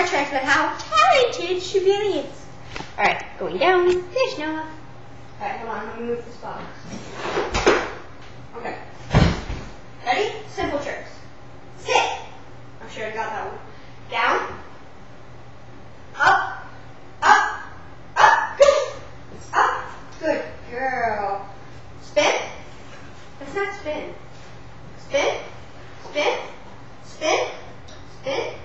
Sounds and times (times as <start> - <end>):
Speech: 0.0 - 2.4, 5.4 - 6.8, 8.5 - 8.9, 10.0 - 11.2, 11.8 - 14.6, 18.2 - 22.6, 23.4 - 24.2, 25.0 - 25.5, 26.1 - 27.6.